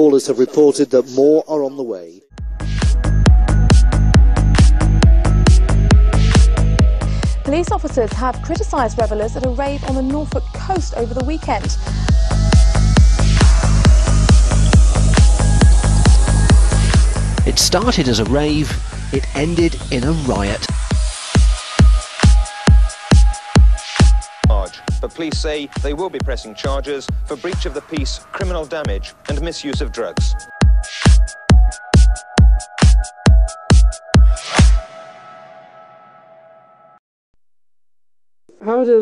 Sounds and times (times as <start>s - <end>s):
Speech: 0.0s - 2.2s, 7.5s - 11.8s, 17.4s - 20.8s, 24.5s - 30.4s, 38.5s - 39.0s
Techno: 2.4s - 34.8s.